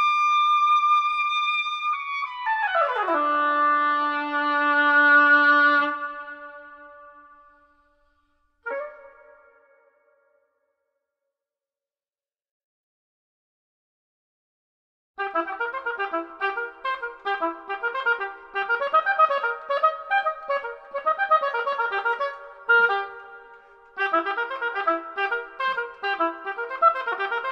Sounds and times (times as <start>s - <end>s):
Clarinet: 0.0s - 10.3s, 15.2s - 27.5s.